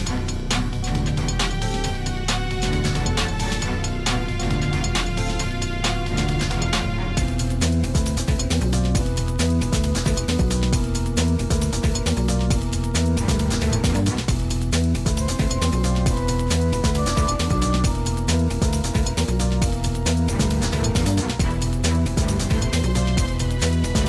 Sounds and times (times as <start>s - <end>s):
Video game music: 0.0s - 24.0s.